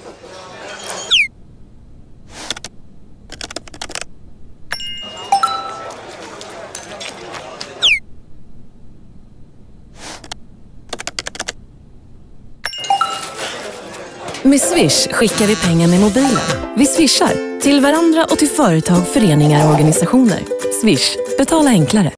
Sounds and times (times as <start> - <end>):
Music: 12.8 - 22.1
Speech: 13.6 - 22.1.